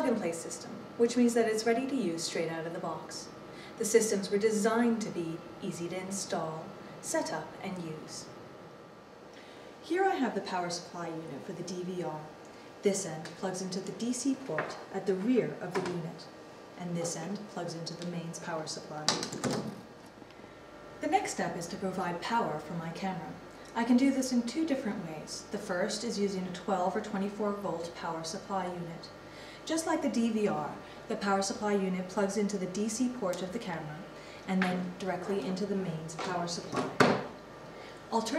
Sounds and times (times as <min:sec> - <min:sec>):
Speech: 0:00.0 - 0:08.4, 0:09.8 - 0:19.2, 0:21.0 - 0:29.1, 0:29.7 - 0:37.2, 0:38.1 - 0:38.3.